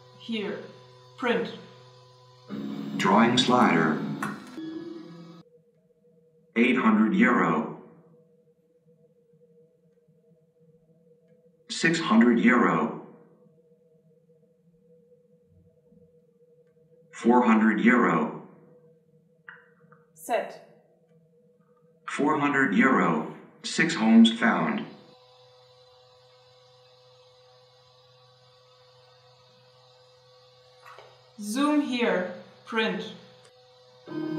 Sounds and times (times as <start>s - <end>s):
Speech: 0.2s - 1.7s, 3.0s - 4.1s, 6.6s - 7.8s, 11.7s - 13.0s, 17.2s - 18.4s, 20.2s - 20.6s, 22.1s - 25.0s, 31.4s - 33.2s.